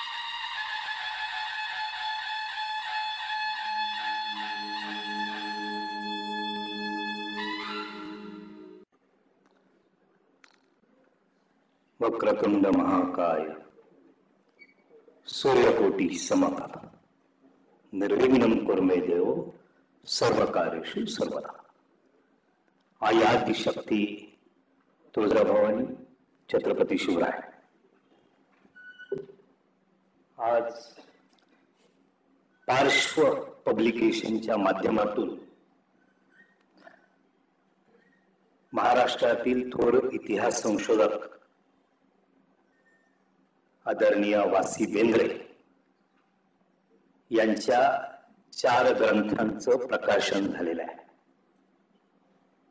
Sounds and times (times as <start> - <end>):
Narration, monologue: 8.8 - 52.7
Male speech, man speaking: 12.0 - 13.7, 15.2 - 17.0, 17.9 - 21.7, 23.0 - 24.3, 25.1 - 27.6, 30.4 - 31.1, 32.7 - 35.6, 38.7 - 41.4, 43.9 - 45.6, 47.3 - 51.1.